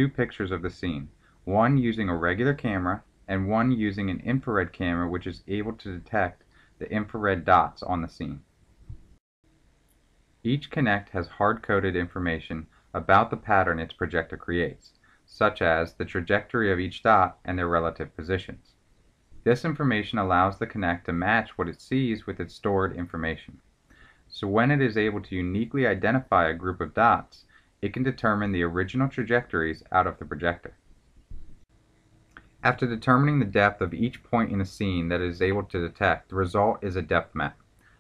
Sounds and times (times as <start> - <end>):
Speech: 0.0 - 8.5, 10.5 - 18.7, 19.4 - 23.6, 24.3 - 30.8, 32.6 - 37.6.